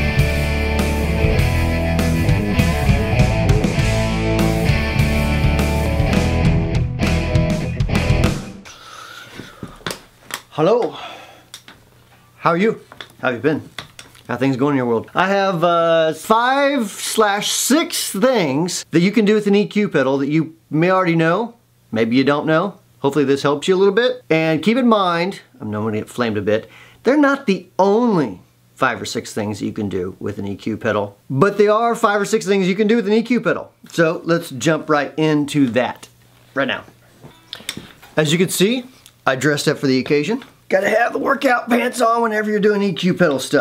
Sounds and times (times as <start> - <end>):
Speech: 10.5 - 11.0, 12.4 - 13.7, 14.3 - 37.0, 38.2 - 43.6.